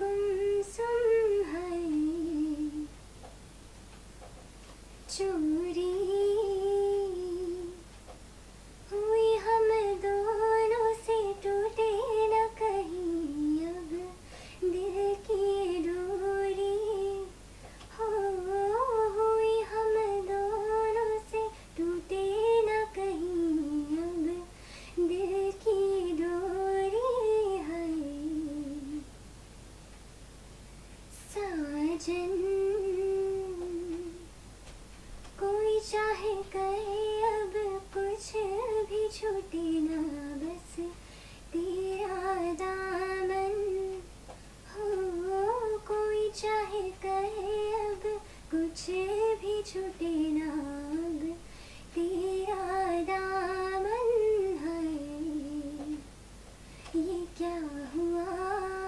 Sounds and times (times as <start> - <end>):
Inside, small room: 0.0 - 58.8.